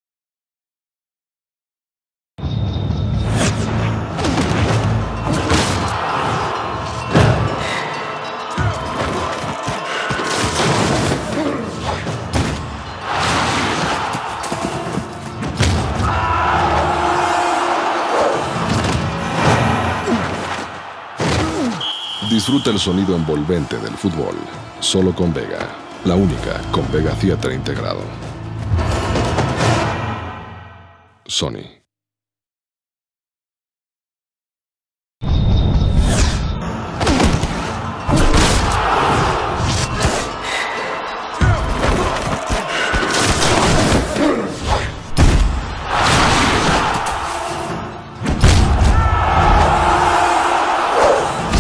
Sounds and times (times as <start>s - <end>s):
Music: 2.4s - 31.3s, 35.4s - 51.6s
Speech: 22.2s - 28.2s, 31.2s - 31.9s.